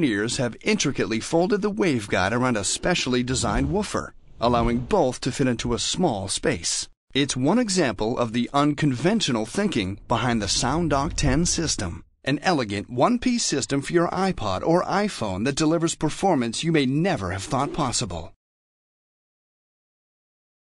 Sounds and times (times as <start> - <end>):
Speech: 0.0 - 18.4.